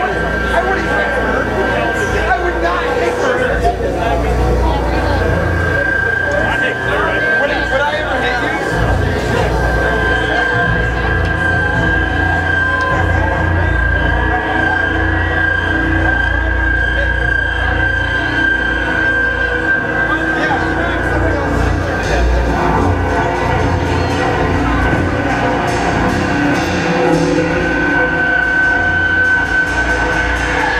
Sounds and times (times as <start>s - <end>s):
Speech: 0.0s - 30.7s.